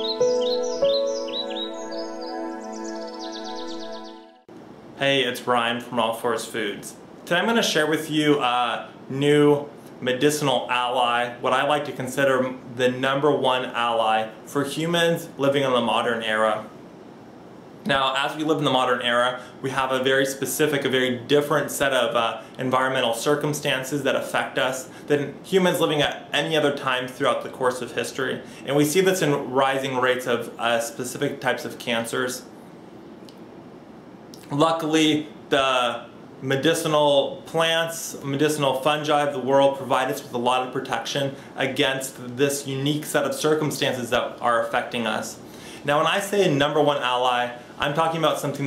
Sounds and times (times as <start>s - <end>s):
Speech: 5.0s - 16.7s, 17.9s - 32.5s, 34.4s - 48.6s.